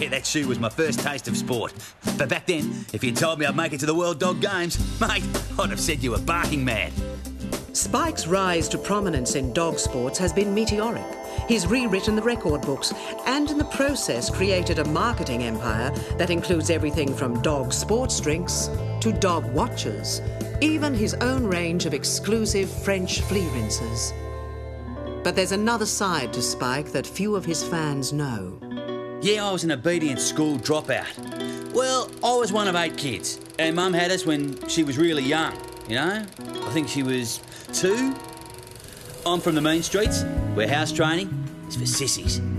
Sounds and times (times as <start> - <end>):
Speech: 0.0 - 7.0, 7.8 - 24.1, 25.3 - 28.6, 29.2 - 31.2, 31.8 - 38.2, 39.3 - 42.4
Music: 0.0 - 42.5.